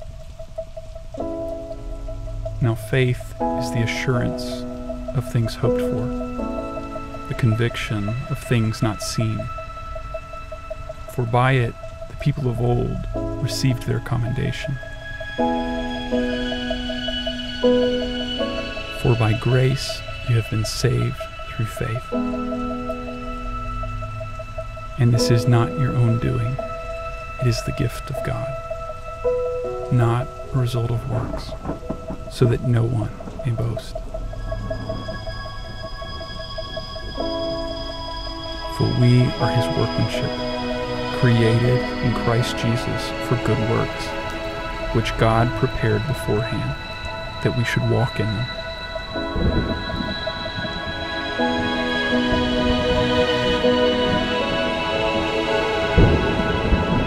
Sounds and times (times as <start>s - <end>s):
Music: 0.0s - 57.0s
Speech: 2.6s - 4.6s, 5.2s - 6.2s, 7.3s - 9.5s, 11.1s - 14.8s, 19.0s - 22.1s, 25.0s - 26.6s, 27.4s - 28.6s, 29.9s - 31.6s, 32.3s - 34.0s, 38.7s - 40.3s, 41.2s - 44.1s, 44.9s - 46.8s, 47.4s - 48.5s.